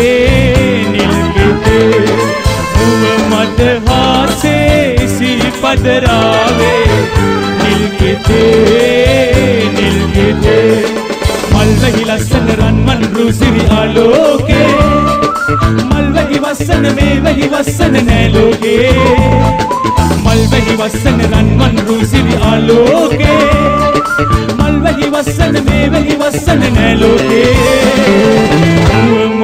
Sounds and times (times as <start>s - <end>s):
Dance music: 0.0s - 29.3s.